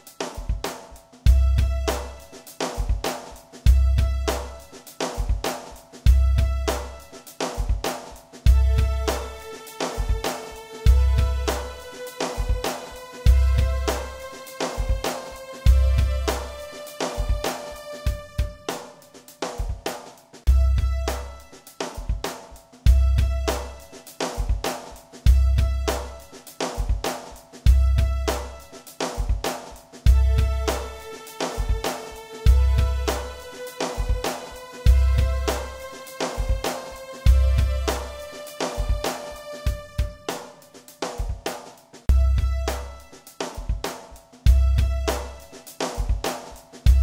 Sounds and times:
Music: 0.0 - 47.0.

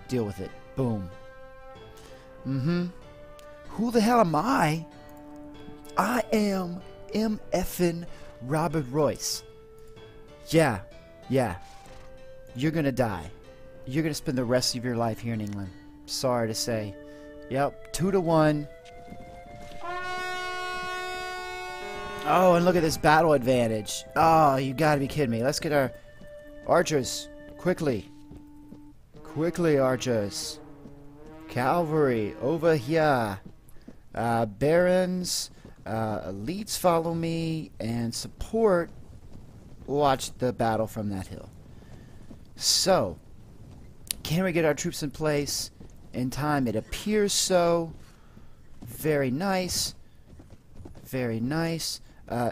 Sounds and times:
Siren: 18.9 - 23.8, 29.2 - 32.8.

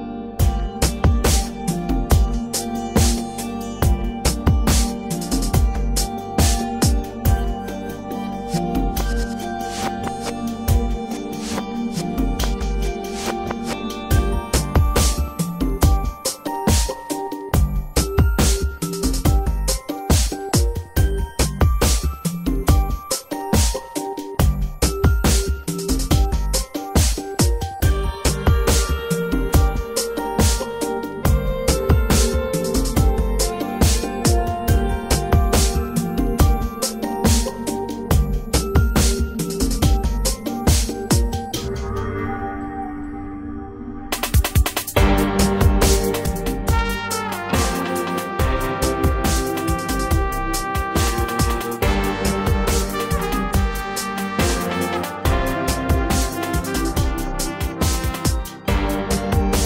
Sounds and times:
Music: 0.0 - 59.6.

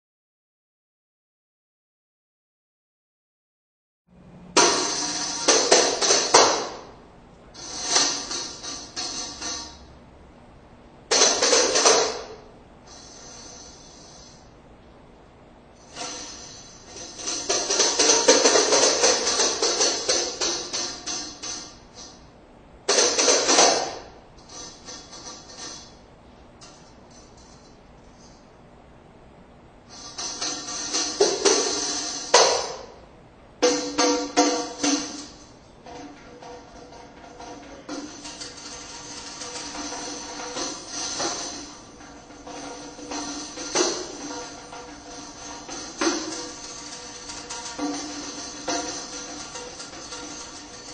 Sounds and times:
Music: 4.4 - 7.0, 7.6 - 10.0, 11.1 - 14.5, 15.8 - 22.2, 22.9 - 26.0, 29.9 - 33.0, 33.6 - 50.9.

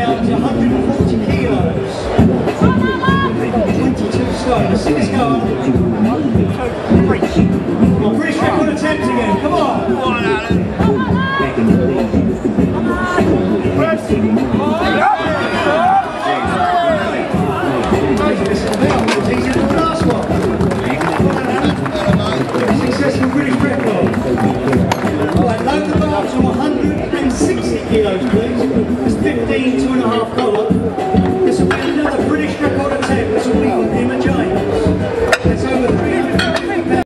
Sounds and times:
Speech: 0.0 - 30.8, 31.4 - 37.0
Music: 0.0 - 37.0.

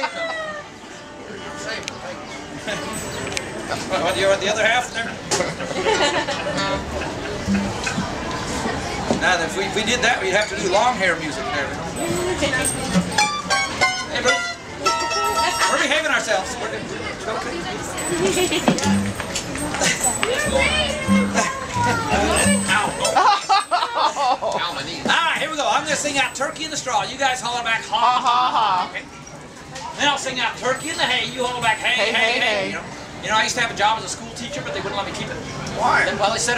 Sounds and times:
Music: 0.3 - 4.7, 6.3 - 8.2, 12.0 - 15.9, 18.0 - 23.2.

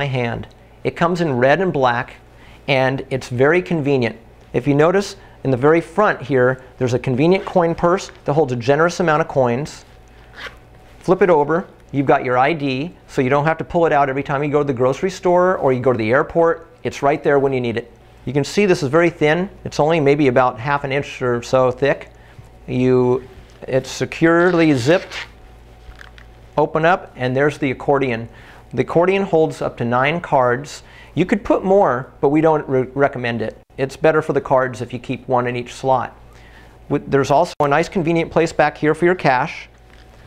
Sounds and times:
Speech: 0.0 - 9.9, 11.0 - 22.1, 22.7 - 25.3, 26.6 - 36.2, 36.9 - 39.8
Zipper (clothing): 10.2 - 10.6.

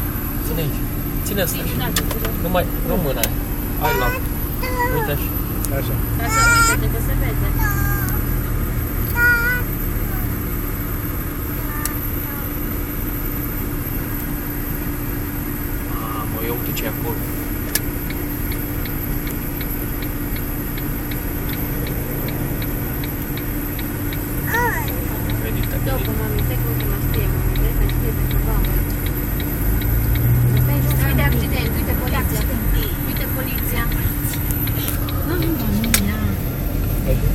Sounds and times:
Car: 0.0 - 37.3
Traffic noise, roadway noise: 0.0 - 37.3
Speech: 0.5 - 7.9, 24.5 - 28.8.

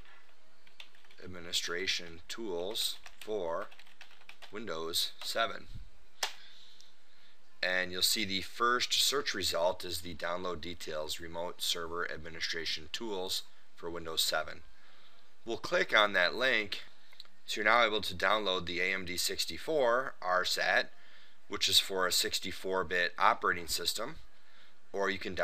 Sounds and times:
Speech: 1.2 - 3.7, 4.5 - 5.8, 7.6 - 14.6, 15.4 - 16.9, 17.5 - 20.9, 21.5 - 24.2, 25.0 - 25.4.

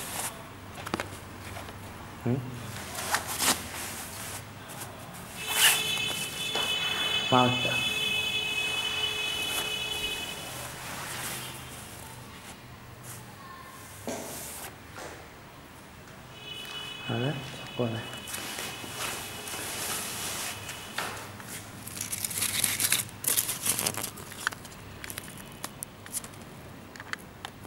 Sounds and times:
Speech: 7.3 - 8.0, 17.1 - 18.2.

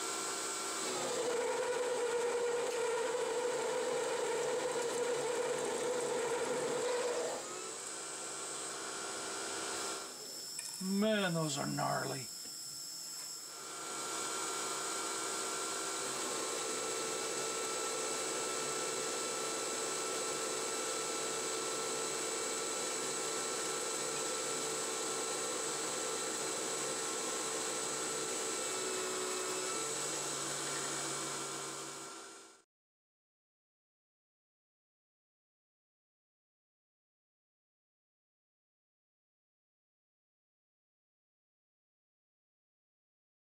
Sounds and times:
Tools: 10.6 - 10.8
Speech: 10.8 - 12.3.

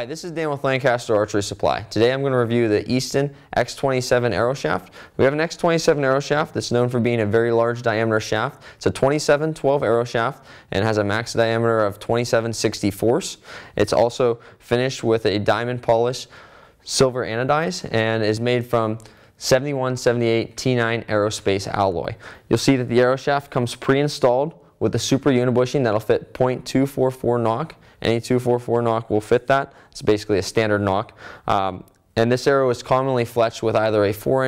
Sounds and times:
Speech: 0.0 - 34.4.

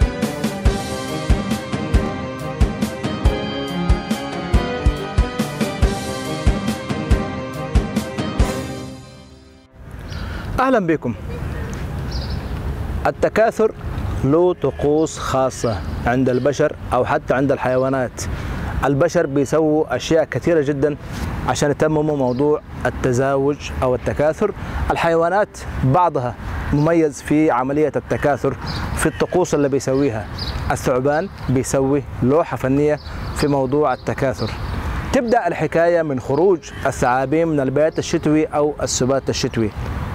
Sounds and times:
Outside, urban or manmade: 0.0 - 40.1
Male speech, man speaking: 10.6 - 11.2, 13.0 - 39.7.

